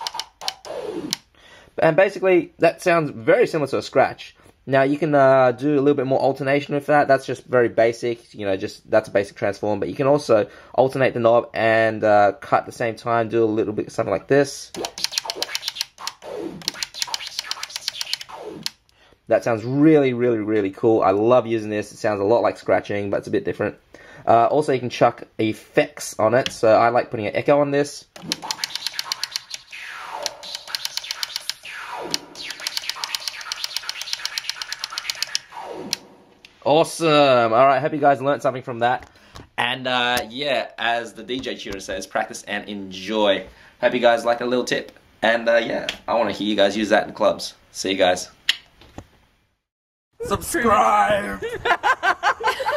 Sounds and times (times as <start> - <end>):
Speech: 1.8 - 14.8, 19.3 - 28.1, 36.6 - 39.0, 39.6 - 48.4, 50.2 - 51.5.